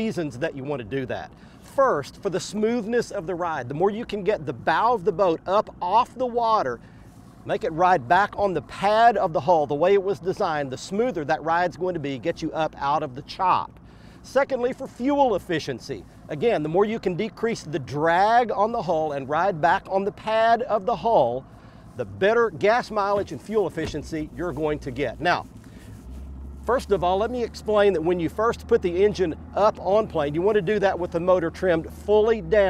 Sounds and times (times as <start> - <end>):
Speech: 0.0 - 6.8, 7.5 - 21.4, 22.0 - 25.5, 26.7 - 32.7
Engine: 0.0 - 32.7
Vehicle: 0.0 - 32.7.